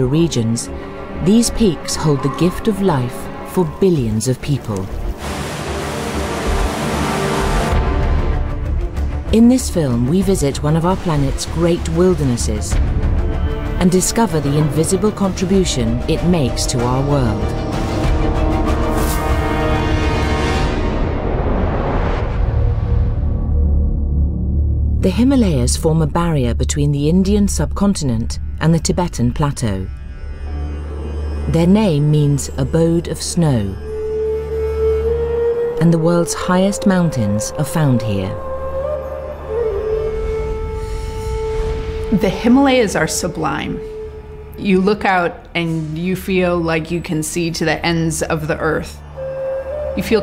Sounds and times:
Speech: 0:00.0 - 0:04.9, 0:09.3 - 0:12.8, 0:13.8 - 0:17.5, 0:25.0 - 0:29.9, 0:31.5 - 0:33.8, 0:35.8 - 0:38.4, 0:42.1 - 0:43.8, 0:44.6 - 0:49.0, 0:50.0 - 0:50.2
Music: 0:00.0 - 0:50.2.

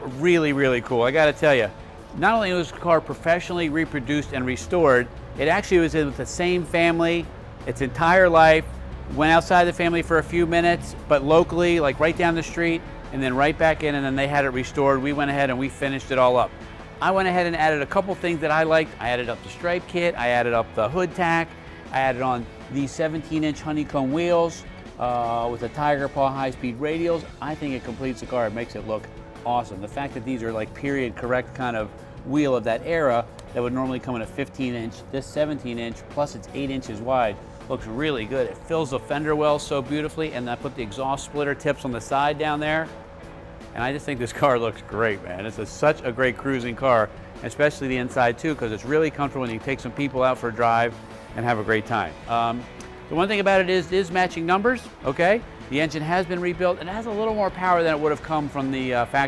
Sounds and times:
Speech: 0:00.0 - 0:42.9, 0:43.7 - 0:59.2
Music: 0:00.0 - 0:59.2.

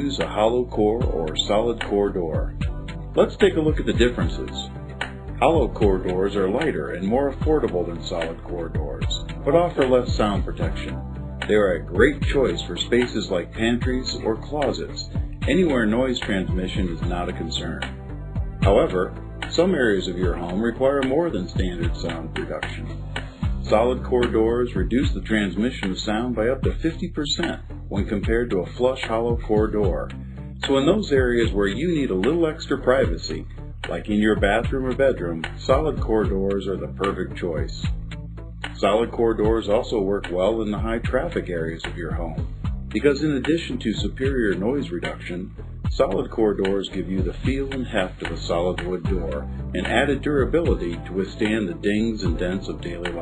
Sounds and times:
Speech: 0:00.0 - 0:04.8, 0:05.4 - 0:18.0, 0:18.6 - 0:38.0, 0:38.8 - 0:53.2
Music: 0:00.0 - 0:53.2.

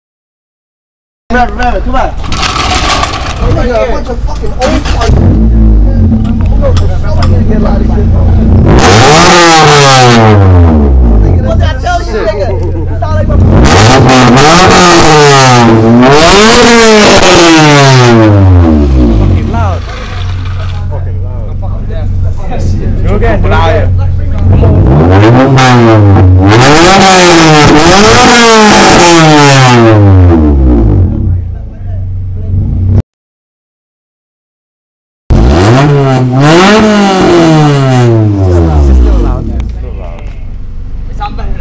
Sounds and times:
Speech: 0:01.3 - 0:02.2, 0:03.4 - 0:08.5, 0:11.2 - 0:13.6, 0:19.3 - 0:24.9, 0:31.2 - 0:32.6, 0:39.1 - 0:41.6.

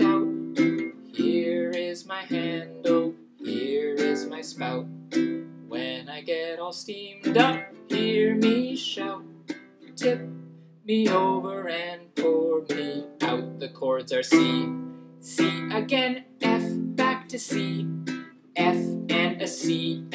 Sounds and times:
Male singing: 0:00.0 - 0:04.9, 0:05.7 - 0:09.3, 0:09.9 - 0:20.1
Music: 0:00.0 - 0:20.1.

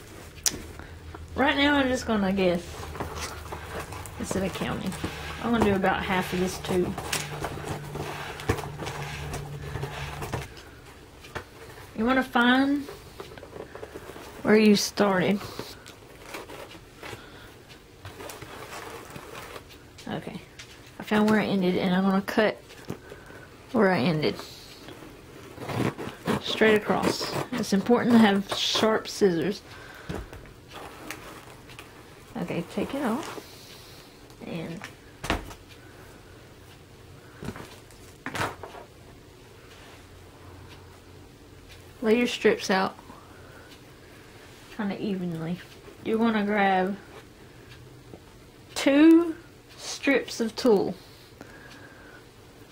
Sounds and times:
Speech: 0:01.4 - 0:02.7, 0:04.2 - 0:07.0, 0:12.0 - 0:12.9, 0:14.4 - 0:15.8, 0:20.0 - 0:22.6, 0:23.7 - 0:24.7, 0:26.3 - 0:29.6, 0:32.4 - 0:33.4, 0:34.4 - 0:34.9, 0:42.0 - 0:43.0, 0:44.8 - 0:47.1, 0:48.8 - 0:51.0.

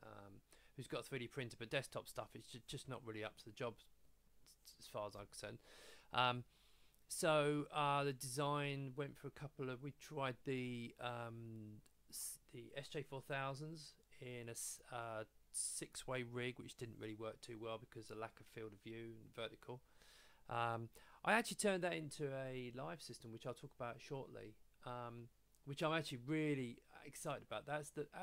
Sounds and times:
Speech: 0:00.0 - 0:03.9, 0:04.5 - 0:06.5, 0:07.1 - 0:19.8, 0:20.5 - 0:28.2.

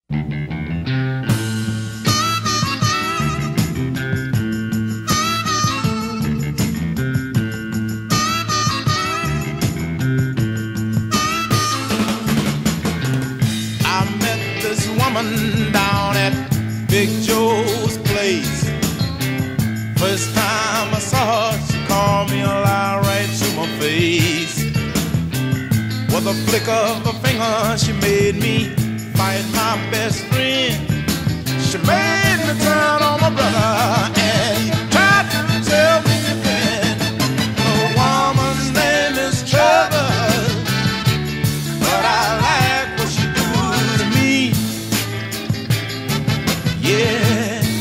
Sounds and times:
Ska: 0:00.1 - 0:47.8.

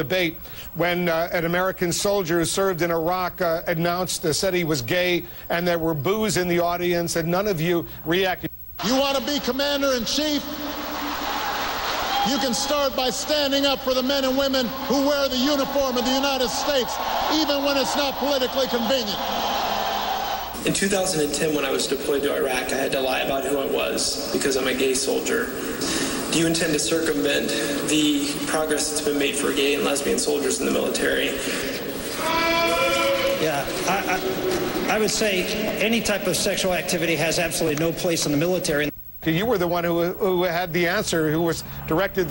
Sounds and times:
Speech: 0:00.0 - 0:10.5, 0:12.2 - 0:19.2, 0:20.6 - 0:25.6, 0:26.3 - 0:31.6, 0:33.0 - 0:42.3.

